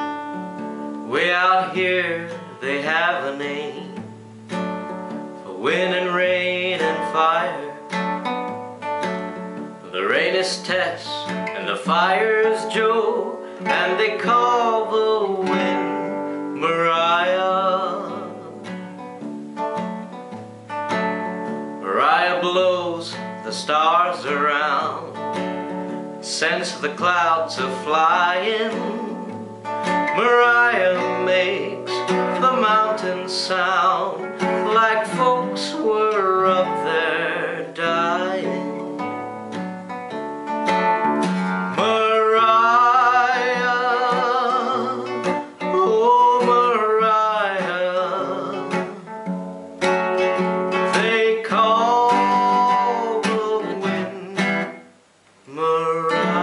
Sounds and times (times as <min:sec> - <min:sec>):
Music: 0:00.0 - 0:56.4.